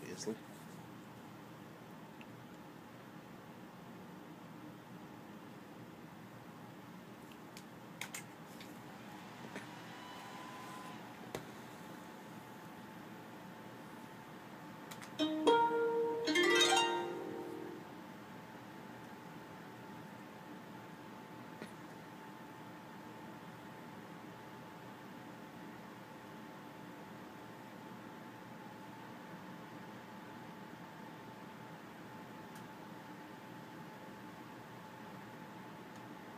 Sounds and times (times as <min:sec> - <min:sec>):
Music: 0:15.2 - 0:18.0.